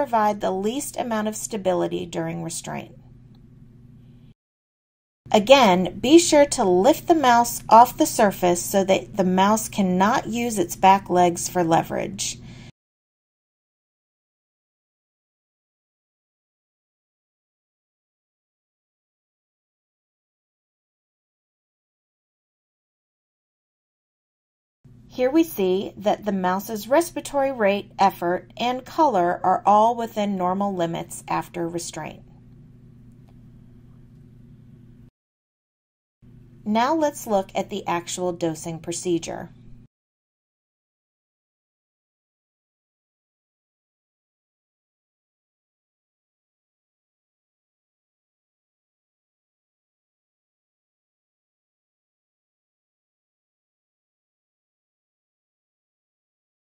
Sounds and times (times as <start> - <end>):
Speech: 0.0 - 3.0, 5.3 - 12.4, 25.2 - 32.2, 36.7 - 39.6.